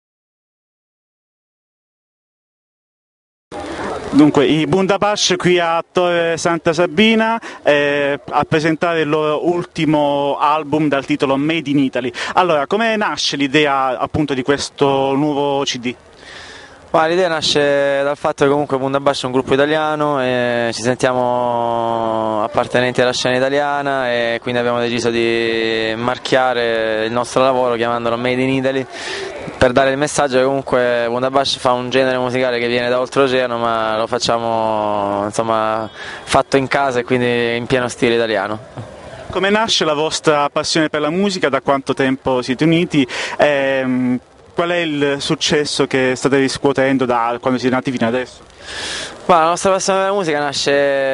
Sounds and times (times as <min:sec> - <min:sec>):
Speech: 0:03.6 - 0:16.0, 0:16.9 - 0:38.6, 0:39.3 - 0:48.5, 0:49.3 - 0:51.1.